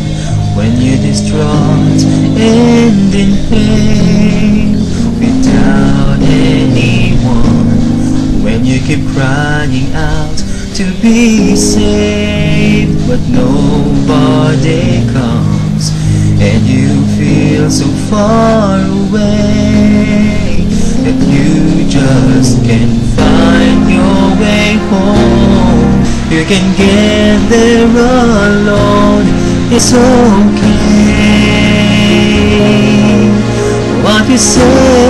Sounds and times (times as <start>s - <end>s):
Male singing: 0.0s - 35.0s
Music: 0.0s - 35.0s.